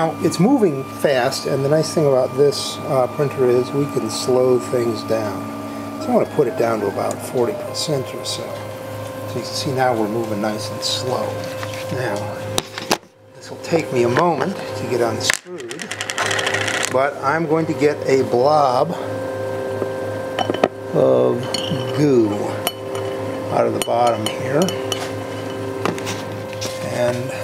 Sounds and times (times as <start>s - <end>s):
Speech: 0.0s - 5.4s, 6.0s - 8.7s, 9.3s - 12.5s, 13.4s - 15.9s, 16.9s - 19.0s, 20.9s - 22.6s, 23.5s - 24.8s, 26.8s - 27.4s.